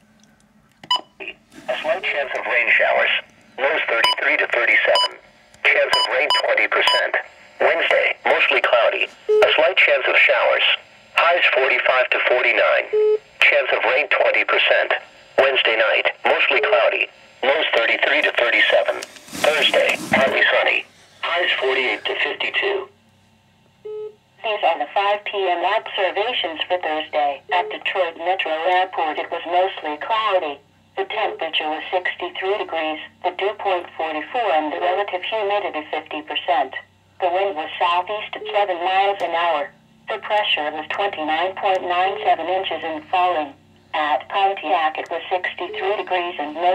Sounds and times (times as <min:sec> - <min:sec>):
Speech: 0:01.2 - 0:22.9, 0:24.4 - 0:46.7.